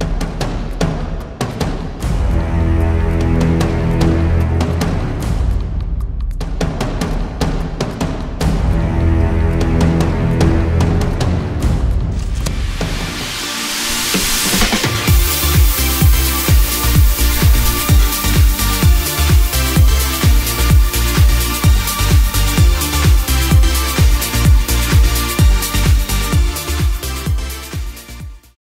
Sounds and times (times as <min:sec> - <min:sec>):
Music: 0:00.0 - 0:28.6.